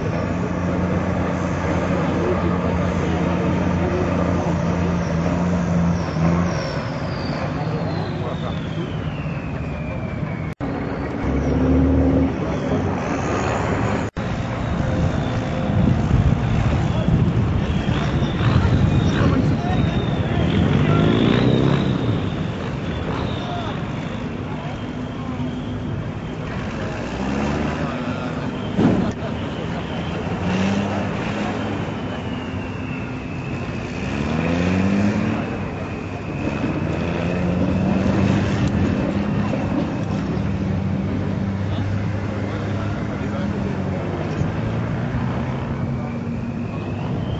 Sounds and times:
Speech: 0:00.0 - 0:05.4, 0:07.2 - 0:10.2, 0:14.9 - 0:22.0, 0:23.0 - 0:32.5, 0:35.1 - 0:47.2
Truck: 0:00.0 - 0:47.3.

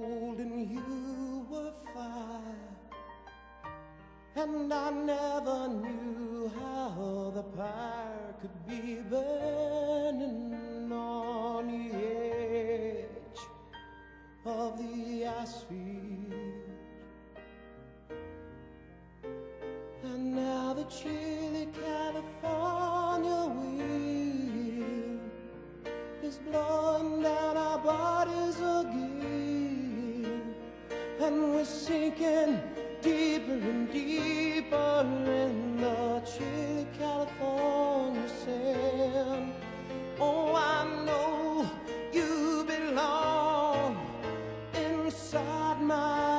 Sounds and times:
Piano: 0:00.0 - 0:46.3.

